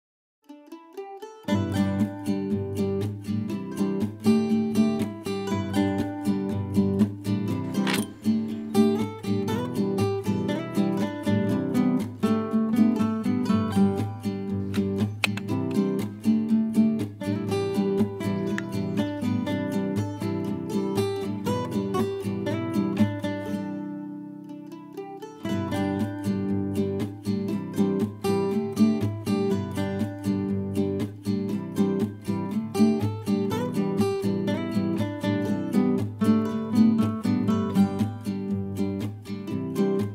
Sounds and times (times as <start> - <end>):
Mandolin: 0.4 - 40.1.